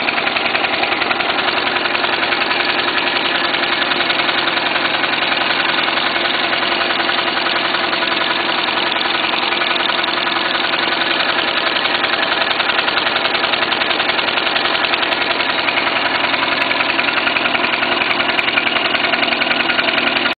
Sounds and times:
Heavy engine (low frequency): 0.0s - 20.3s
Idling: 0.0s - 20.3s.

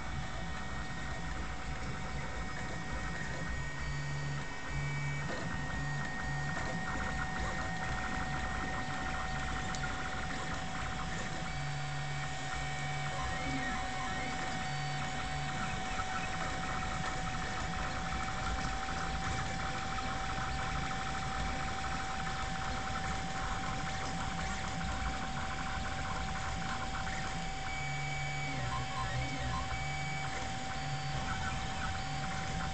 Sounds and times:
Printer: 0.0s - 32.7s.

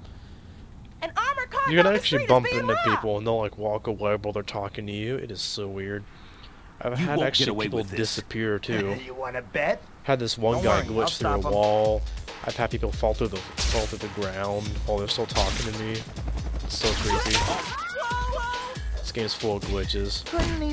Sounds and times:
Speech: 1.0s - 6.0s, 6.8s - 9.3s, 10.1s - 16.0s, 16.7s - 18.4s, 19.0s - 20.7s.

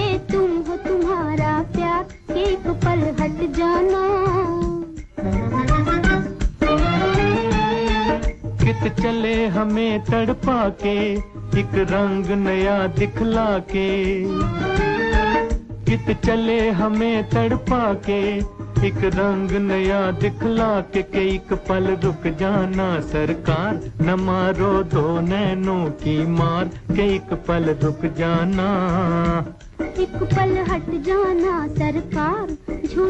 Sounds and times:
Music of Bollywood: 0.0s - 33.0s.

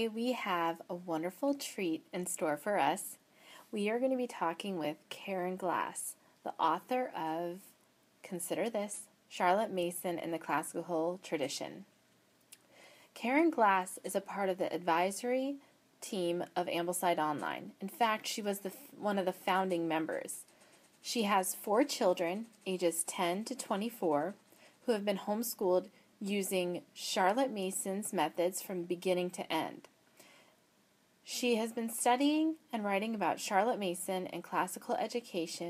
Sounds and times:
Speech: 0.0s - 11.9s, 13.2s - 29.9s, 31.3s - 35.6s.

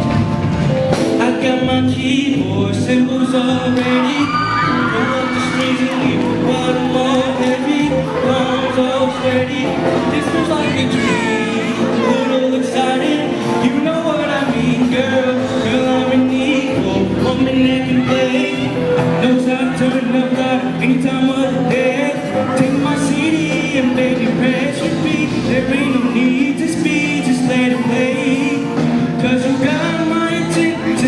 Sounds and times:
Middle Eastern music: 0.0s - 31.0s.

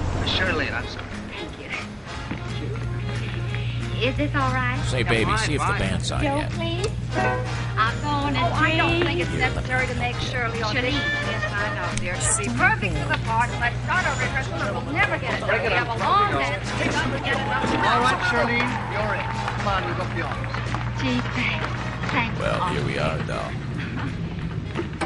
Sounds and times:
Swing music: 0.0s - 22.8s.

